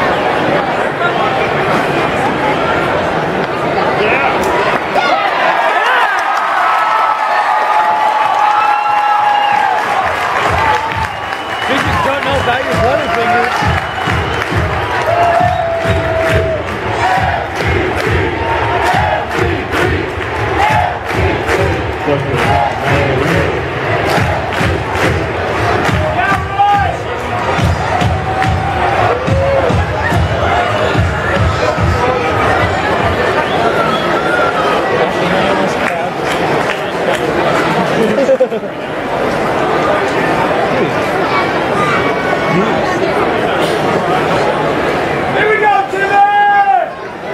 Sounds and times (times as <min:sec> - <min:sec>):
Music: 0:10.5 - 0:33.4.